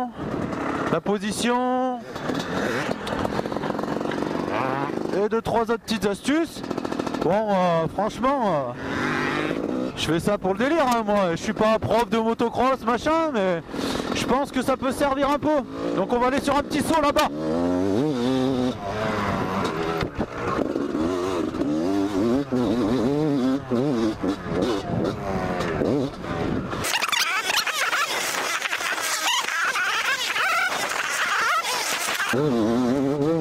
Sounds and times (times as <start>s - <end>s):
Speech: 0.9s - 2.0s, 5.1s - 6.6s, 7.2s - 8.8s, 10.0s - 13.6s, 14.2s - 17.3s.